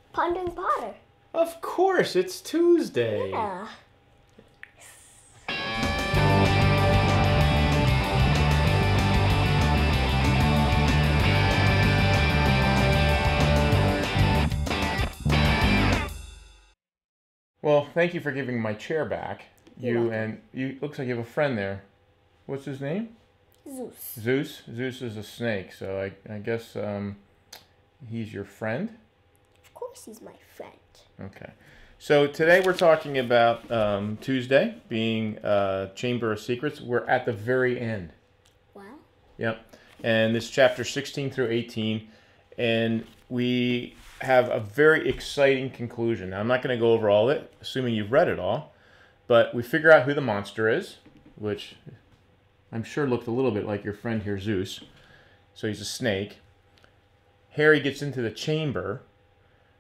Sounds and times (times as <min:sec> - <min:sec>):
Inside, small room: 0:17.6 - 0:59.8
Speech: 0:31.2 - 0:38.2, 0:38.8 - 0:48.7, 0:49.3 - 0:52.0, 0:52.7 - 0:54.9, 0:55.6 - 0:56.4.